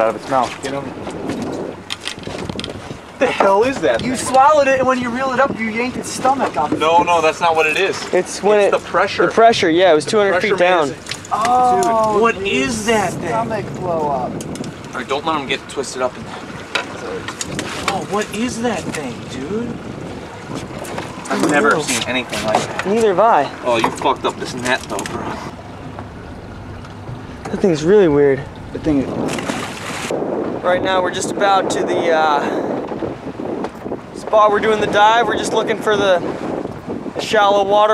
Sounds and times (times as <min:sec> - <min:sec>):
Outside, rural or natural: 0:00.0 - 0:37.9
Speech: 0:34.2 - 0:36.2.